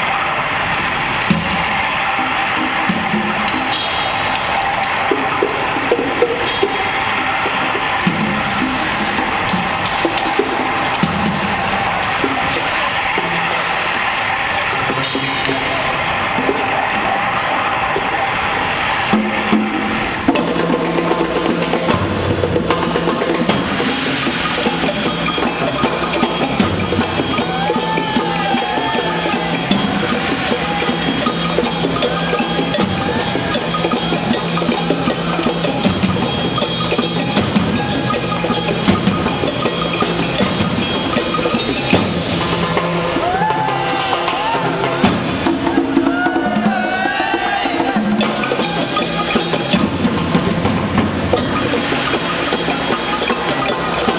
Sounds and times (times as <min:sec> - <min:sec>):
Wood block: 0:01.2 - 0:18.3, 0:19.1 - 0:54.1.